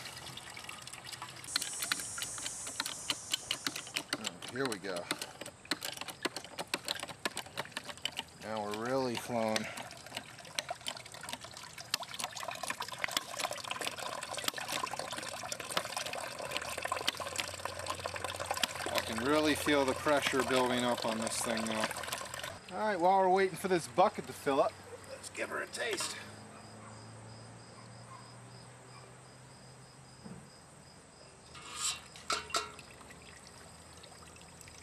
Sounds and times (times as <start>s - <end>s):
Liquid: 0.0s - 26.2s, 32.3s - 34.8s
Speech: 19.0s - 21.9s, 22.7s - 26.3s.